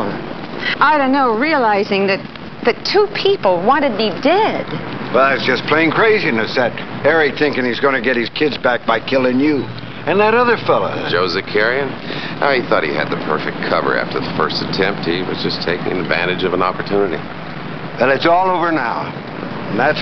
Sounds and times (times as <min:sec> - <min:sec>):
Speech: 0:05.2 - 0:17.2.